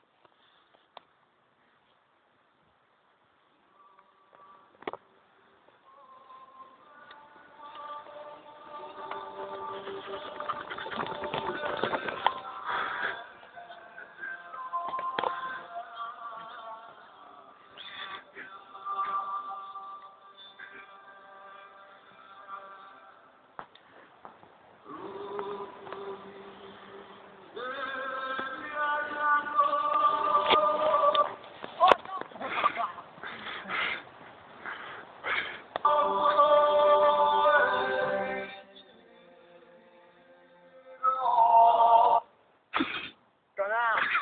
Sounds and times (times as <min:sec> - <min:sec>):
Mantra: 0:05.8 - 0:23.4, 0:24.8 - 0:32.0, 0:35.8 - 0:42.3.